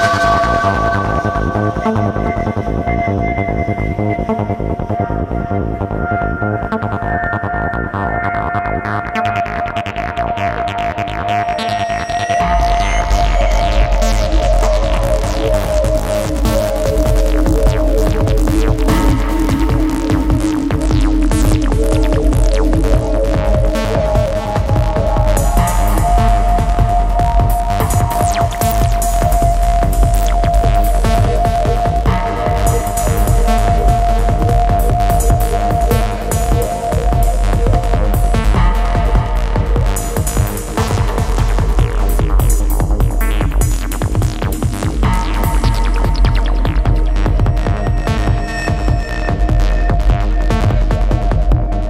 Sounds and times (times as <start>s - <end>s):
Techno: 0.0s - 51.8s.